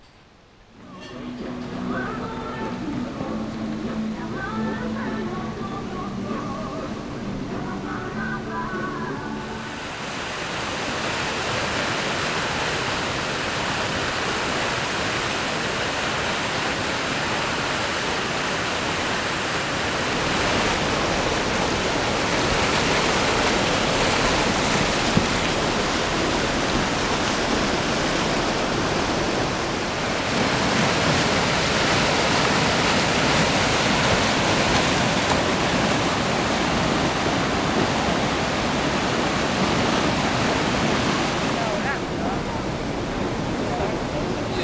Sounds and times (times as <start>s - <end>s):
Rowboat, canoe, kayak: 0.0s - 44.6s
Waves, surf: 0.0s - 44.6s.